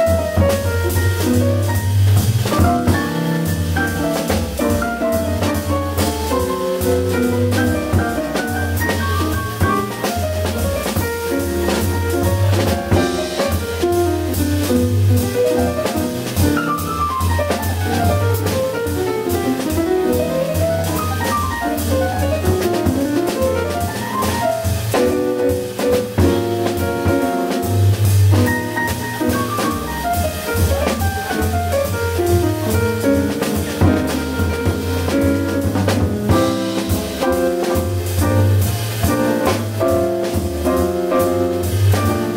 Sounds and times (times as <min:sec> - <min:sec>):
Music: 0:00.0 - 0:42.3.